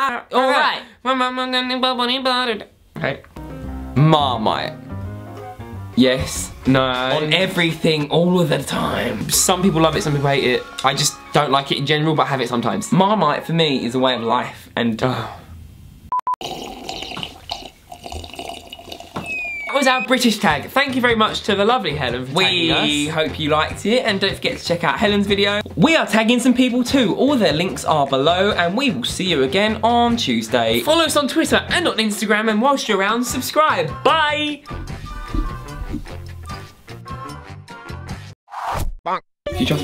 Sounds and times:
Gurgling: 16.4s - 20.1s.

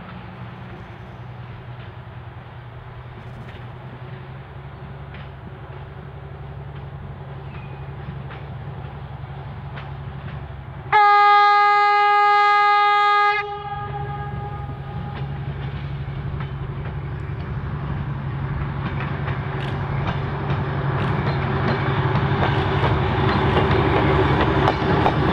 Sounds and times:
Railroad car, train wagon: 0.0s - 25.3s
Train horn: 10.9s - 15.5s.

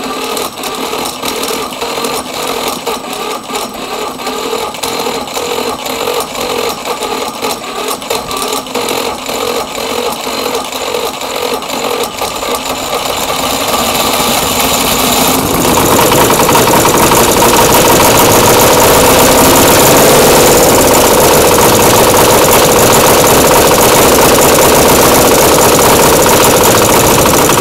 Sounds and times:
Engine starting: 0.0s - 27.6s
Motorcycle: 0.0s - 27.6s.

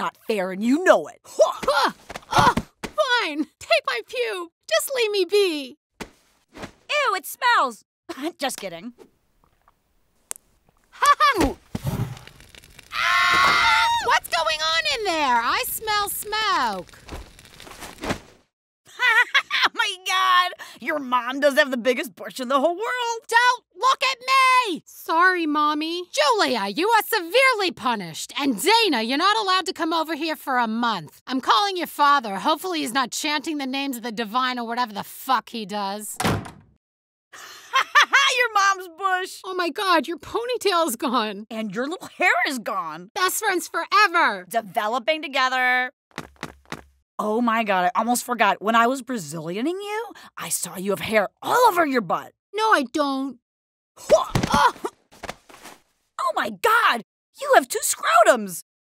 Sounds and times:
Speech: 0.0s - 5.8s, 6.9s - 9.0s, 14.0s - 16.8s, 19.0s - 36.2s, 38.1s - 46.0s, 47.2s - 53.4s, 56.2s - 58.6s.

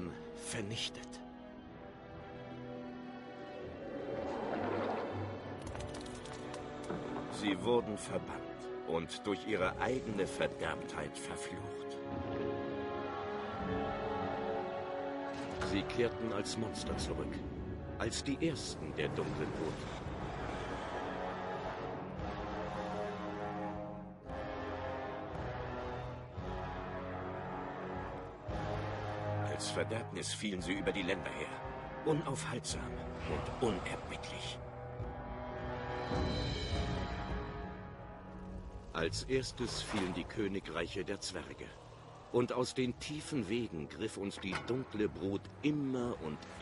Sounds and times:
Speech: 0.0s - 1.2s, 7.4s - 11.9s, 15.6s - 17.4s, 18.0s - 19.8s, 29.5s - 34.6s, 39.0s - 41.8s, 42.4s - 46.6s
Music: 0.0s - 46.6s.

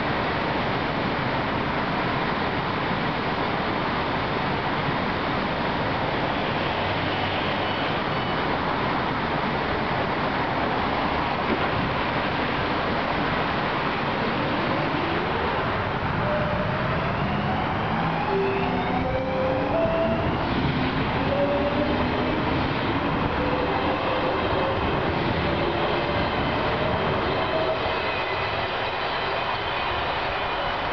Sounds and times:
Railroad car, train wagon: 0.0s - 30.9s
Subway, metro, underground: 0.0s - 30.9s
Train: 0.0s - 30.9s.

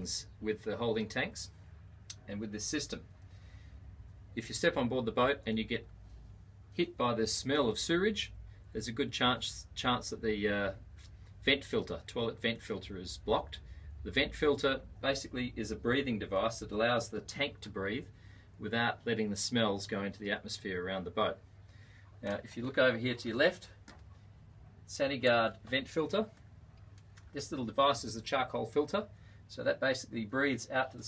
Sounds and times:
Speech: 0.0s - 3.1s, 4.4s - 5.9s, 6.7s - 21.4s, 22.2s - 23.8s, 24.9s - 26.4s, 27.3s - 31.0s.

